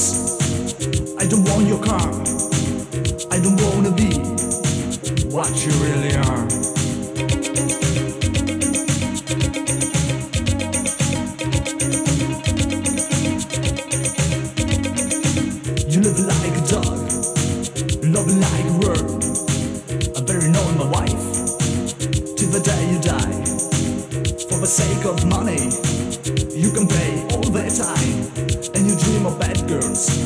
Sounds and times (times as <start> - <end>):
Funk: 0.0 - 30.2.